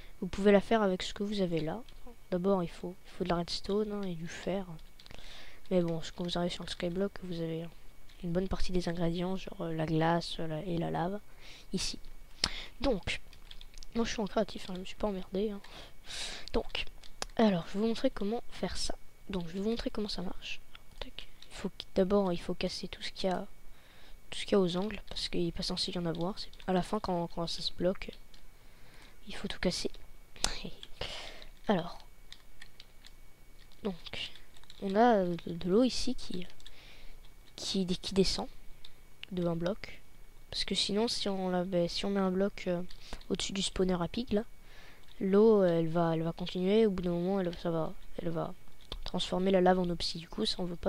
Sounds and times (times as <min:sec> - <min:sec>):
Speech: 0:00.2 - 0:04.8, 0:05.7 - 0:12.0, 0:12.8 - 0:13.2, 0:13.9 - 0:23.5, 0:24.3 - 0:28.2, 0:29.2 - 0:30.9, 0:31.6 - 0:32.1, 0:33.8 - 0:36.6, 0:37.6 - 0:38.6, 0:39.2 - 0:44.5, 0:45.2 - 0:50.8.